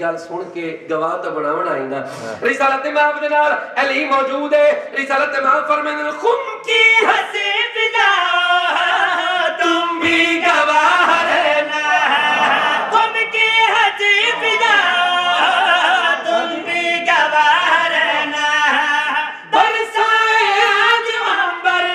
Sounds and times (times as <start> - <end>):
Speech: 0.0 - 6.6.